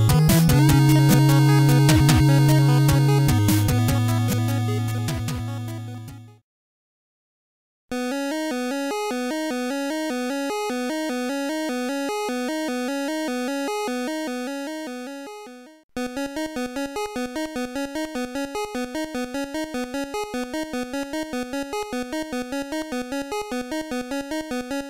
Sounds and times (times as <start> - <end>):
Music: 0.0 - 6.4, 8.0 - 24.8.